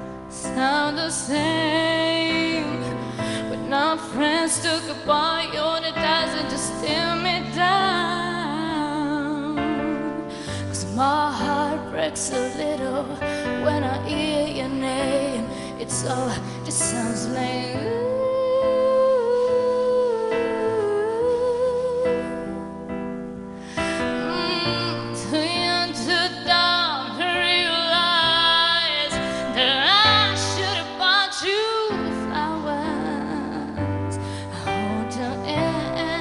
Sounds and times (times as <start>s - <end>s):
Music: 0.0s - 36.2s.